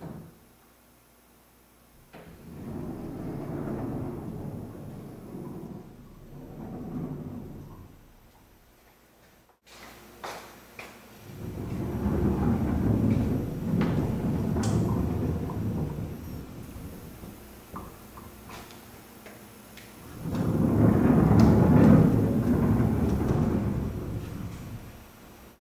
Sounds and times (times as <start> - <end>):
Sliding door: 2.0 - 8.4, 11.2 - 19.0, 20.0 - 25.6.